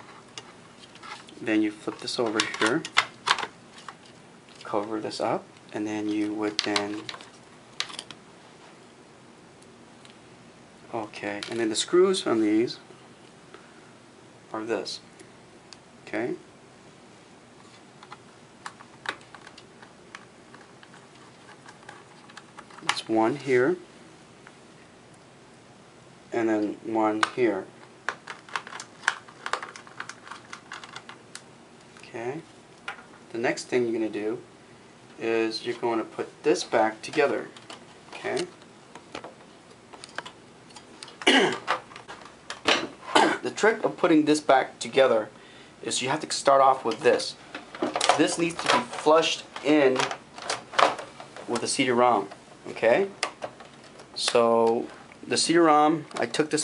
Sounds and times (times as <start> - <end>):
Inside, small room: 0.0 - 56.6
Speech: 1.4 - 2.9, 4.6 - 7.1, 10.9 - 12.9, 14.5 - 15.1, 16.1 - 16.5, 22.8 - 23.8, 26.3 - 27.7, 32.0 - 32.5, 33.3 - 34.5, 35.2 - 38.6, 43.3 - 47.4, 48.1 - 50.2, 51.5 - 53.2, 54.2 - 56.6.